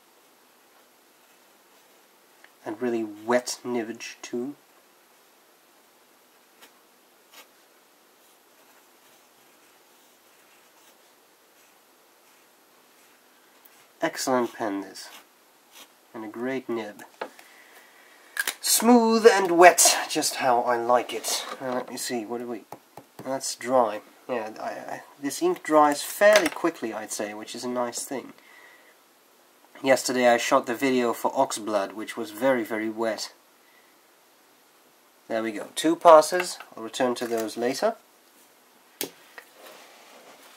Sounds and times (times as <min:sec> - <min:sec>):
Inside, small room: 0:00.0 - 0:40.5
Speech: 0:02.6 - 0:04.6, 0:14.0 - 0:15.2, 0:16.1 - 0:17.1, 0:18.6 - 0:28.4, 0:29.8 - 0:33.4, 0:35.3 - 0:38.0.